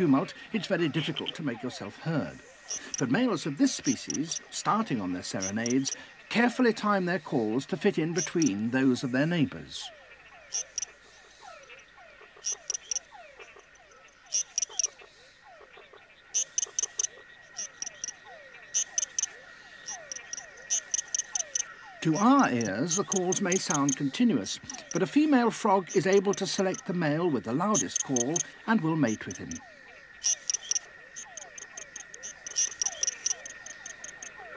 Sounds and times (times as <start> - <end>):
Frog: 0.0 - 34.5.